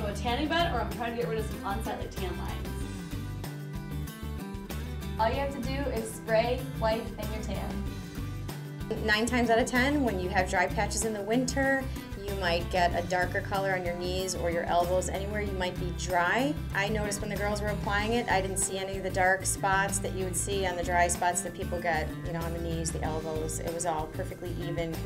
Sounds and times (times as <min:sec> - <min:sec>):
Speech: 0:00.0 - 0:02.7, 0:05.2 - 0:07.8, 0:08.9 - 0:25.0
Music: 0:00.0 - 0:25.0.